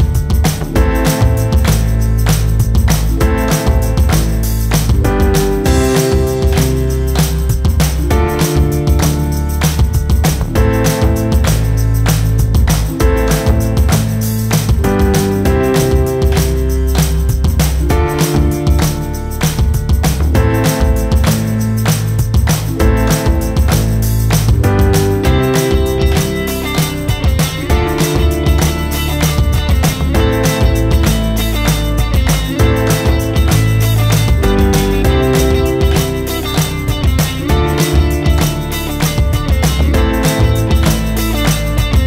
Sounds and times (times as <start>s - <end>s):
Music: 0.0s - 42.0s.